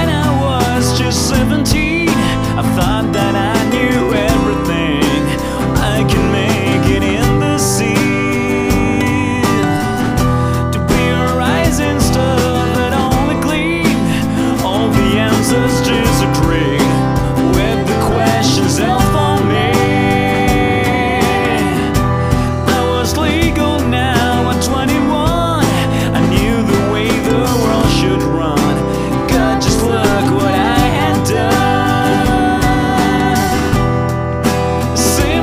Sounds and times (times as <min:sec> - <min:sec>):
Music: 0:00.0 - 0:35.4.